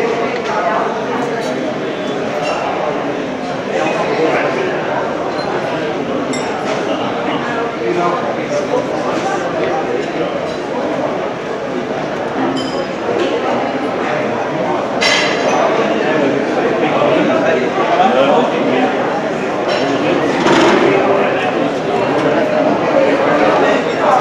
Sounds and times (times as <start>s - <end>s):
Speech: 0.0s - 24.2s.